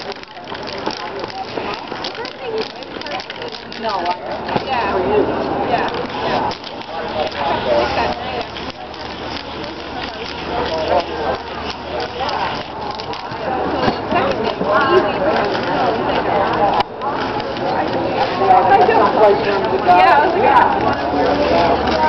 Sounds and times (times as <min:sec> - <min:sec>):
Speech: 0:00.0 - 0:22.0.